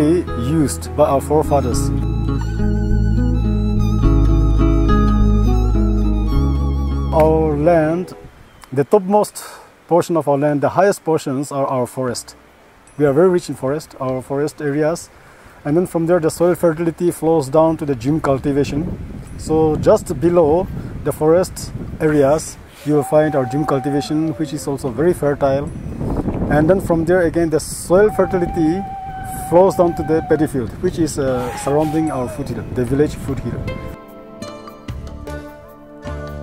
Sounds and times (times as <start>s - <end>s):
Speech: 0.0s - 1.9s, 7.2s - 12.4s, 13.0s - 25.7s, 26.5s - 33.6s
Music: 0.0s - 8.3s, 32.6s - 36.4s.